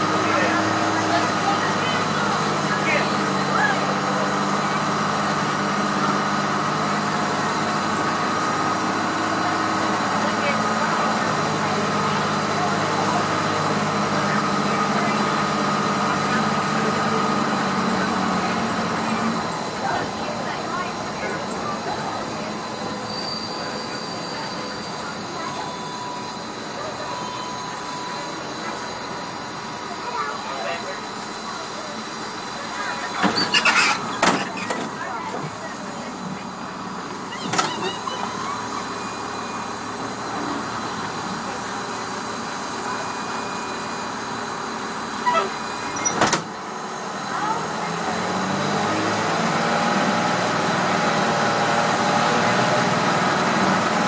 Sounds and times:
Bus: 0:00.0 - 0:54.0
Squeal: 0:23.0 - 0:26.4, 0:33.4 - 0:34.9, 0:45.0 - 0:46.3.

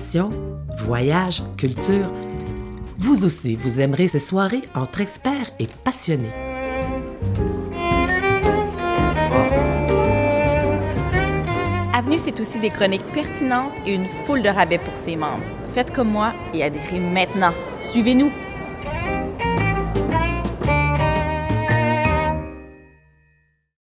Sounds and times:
Speech: 0:00.0 - 0:02.1, 0:03.0 - 0:06.4, 0:12.0 - 0:18.4
Music: 0:00.0 - 0:23.8.

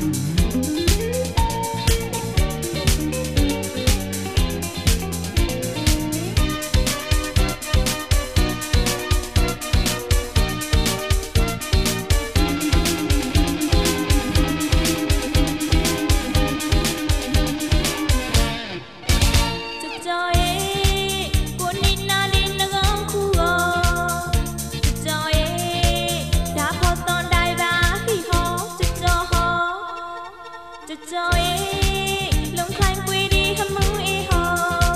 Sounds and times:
Theme music: 0:06.4 - 0:19.8.

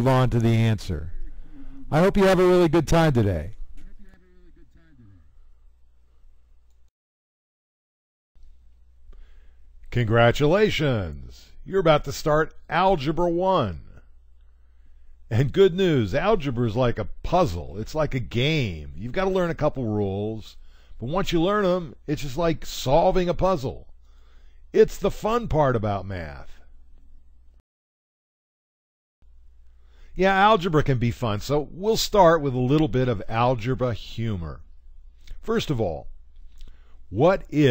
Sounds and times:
Speech: 0:00.0 - 0:05.3, 0:09.9 - 0:14.0, 0:15.3 - 0:23.9, 0:24.8 - 0:26.6, 0:30.2 - 0:34.6, 0:35.4 - 0:36.1, 0:37.1 - 0:37.7.

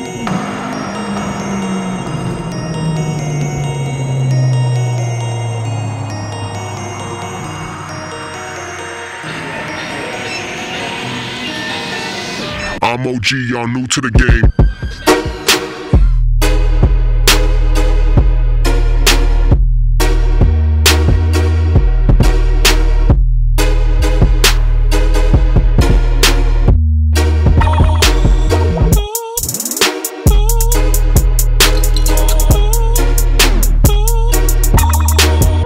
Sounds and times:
Music: 0:00.0 - 0:35.6
Speech: 0:12.8 - 0:14.5.

